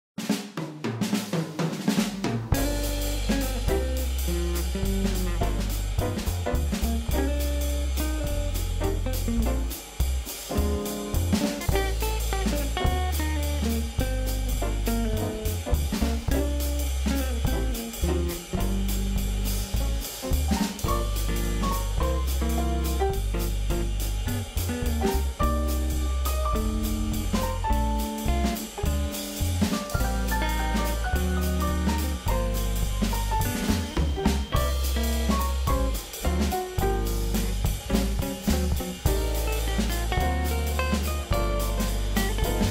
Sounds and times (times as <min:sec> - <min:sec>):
Snare drum: 0:00.2 - 0:42.7.